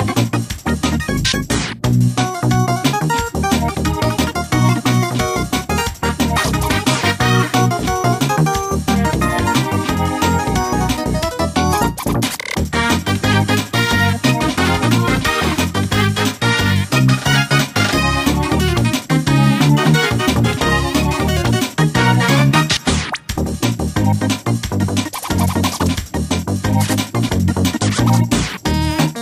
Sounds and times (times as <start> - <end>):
Music: 0.0 - 29.2.